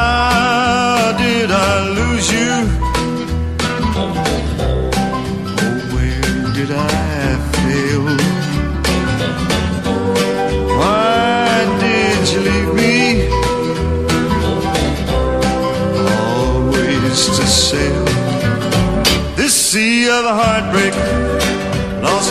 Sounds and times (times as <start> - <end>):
Country: 0.0 - 22.3.